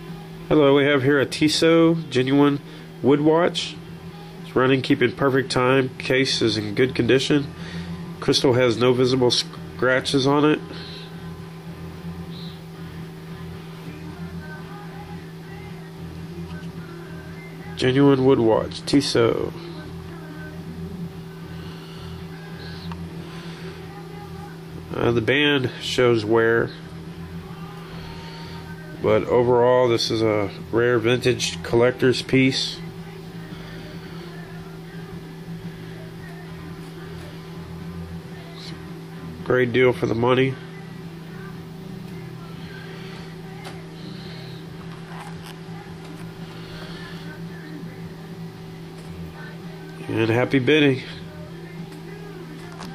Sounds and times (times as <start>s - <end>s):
Music: 0.0s - 52.9s
Speech: 28.8s - 33.3s, 38.3s - 41.6s, 49.4s - 52.9s.